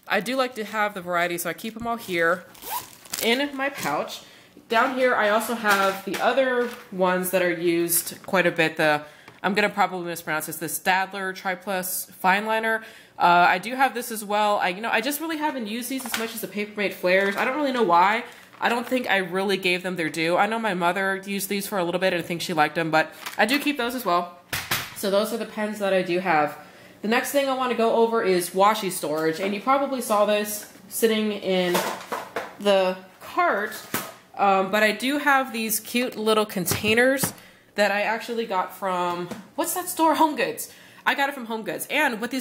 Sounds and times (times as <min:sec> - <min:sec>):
Speech: 0:00.1 - 0:02.5, 0:03.2 - 0:24.4, 0:25.0 - 0:32.0, 0:32.6 - 0:42.4.